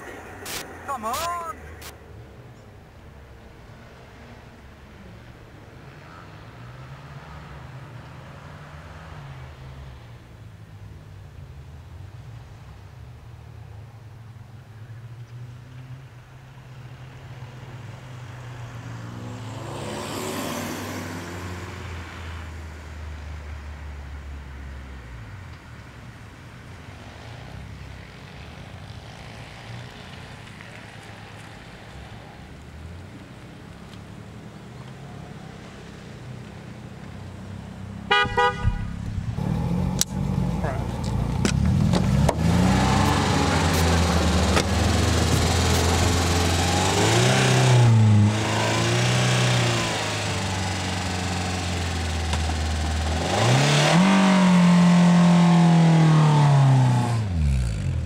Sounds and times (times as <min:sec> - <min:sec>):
Speech: 0:00.0 - 0:01.8, 0:40.5 - 0:41.0
Car: 0:00.0 - 0:58.0
Medium engine (mid frequency): 0:00.0 - 0:58.0.